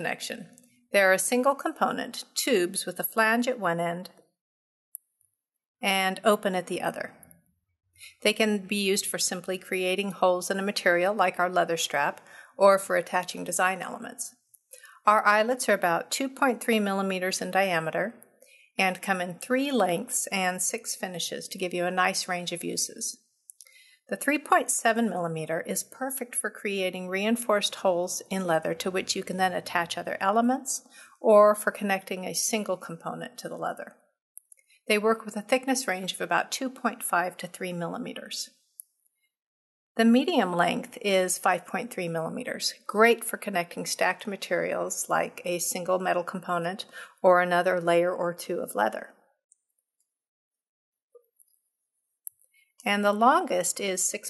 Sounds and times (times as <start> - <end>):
Speech: 0.0 - 4.2, 5.8 - 7.2, 8.1 - 14.4, 15.0 - 18.2, 18.8 - 23.2, 24.1 - 34.0, 34.9 - 38.5, 40.0 - 49.2, 52.8 - 54.3.